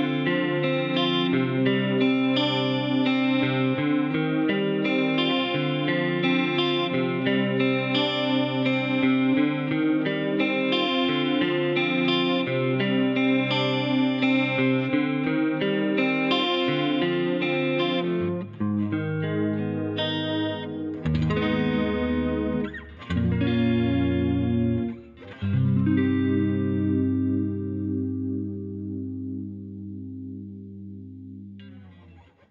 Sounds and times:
Guitar: 0:00.0 - 0:32.5
Inside, small room: 0:00.0 - 0:32.5.

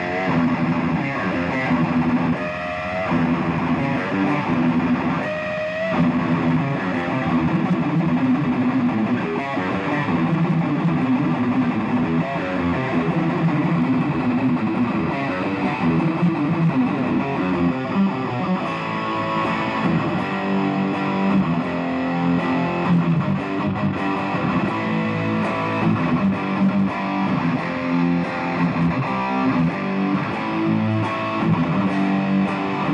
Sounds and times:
Music: 0:00.0 - 0:32.9.

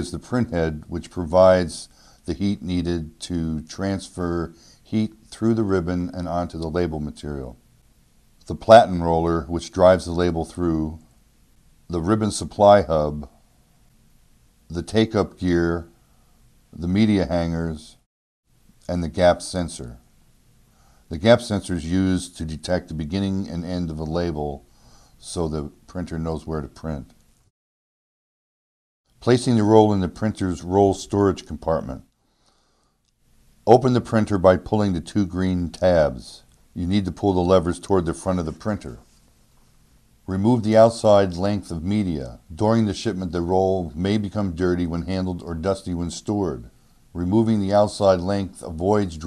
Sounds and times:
Speech: 0:00.0 - 0:07.6, 0:08.4 - 0:11.0, 0:11.9 - 0:13.4, 0:14.7 - 0:16.0, 0:16.7 - 0:18.1, 0:18.8 - 0:20.0, 0:21.1 - 0:27.2, 0:29.2 - 0:32.1, 0:33.6 - 0:39.2, 0:40.3 - 0:49.2.

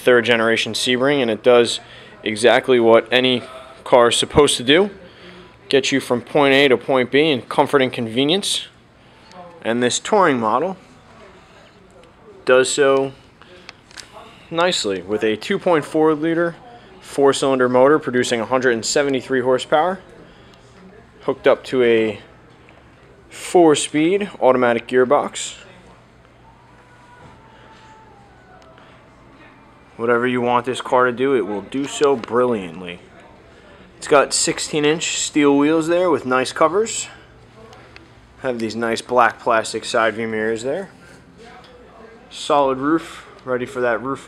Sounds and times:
Speech: 0:00.0 - 0:22.4, 0:23.0 - 0:44.2.

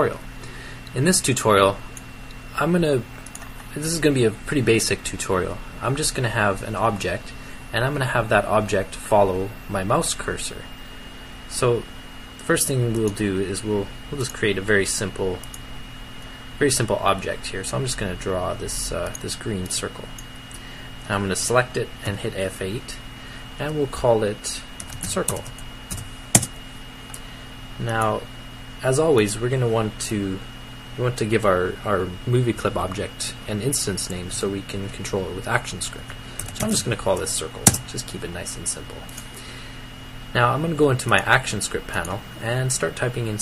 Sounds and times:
Speech: 0:00.0 - 0:00.3, 0:00.9 - 0:01.9, 0:02.5 - 0:03.1, 0:03.7 - 0:10.7, 0:11.5 - 0:15.5, 0:16.6 - 0:20.2, 0:21.0 - 0:23.0, 0:23.6 - 0:25.5, 0:27.8 - 0:39.1, 0:40.3 - 0:43.4.

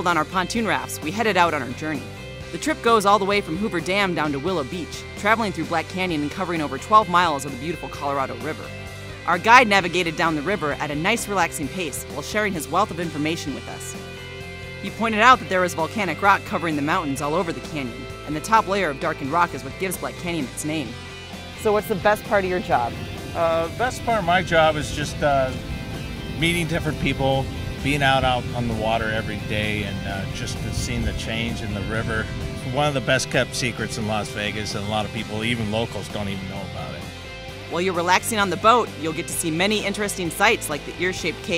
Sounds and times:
Speech: 0:00.0 - 0:02.0, 0:02.6 - 0:08.7, 0:09.3 - 0:14.0, 0:14.8 - 0:21.0, 0:21.6 - 0:25.6, 0:26.4 - 0:37.0, 0:37.7 - 0:41.5
Music: 0:00.0 - 0:41.5.

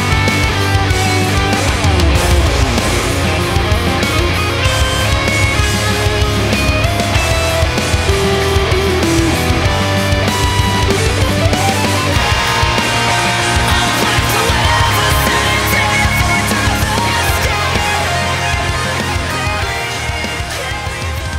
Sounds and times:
Strum: 0:00.0 - 0:20.6.

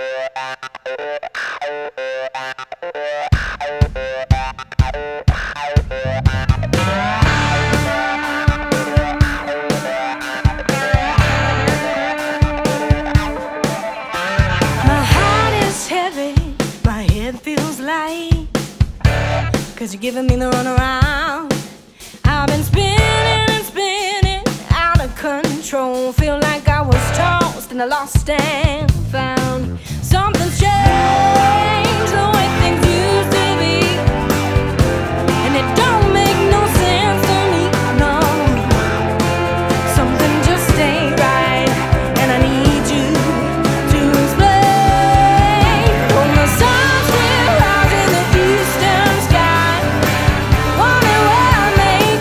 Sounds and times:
Music: 0:00.0 - 0:52.2.

